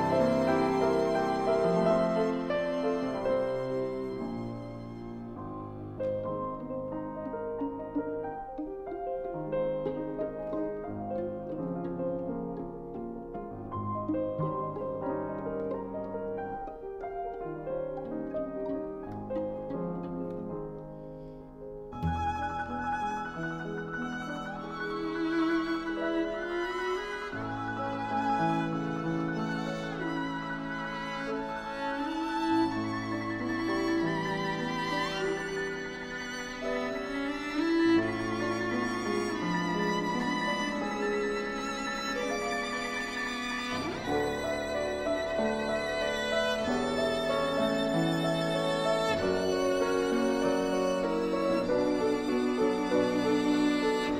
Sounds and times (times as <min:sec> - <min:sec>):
Classical music: 0:00.0 - 0:54.1
Piano: 0:00.0 - 0:54.1
Violin, fiddle: 0:00.0 - 0:54.1.